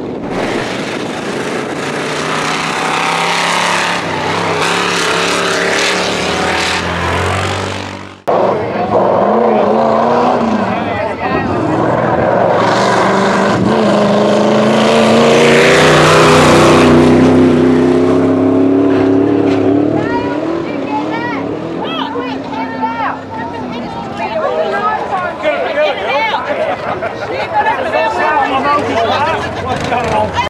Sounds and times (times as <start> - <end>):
Vehicle: 0.0 - 30.4
Speech: 19.9 - 30.4.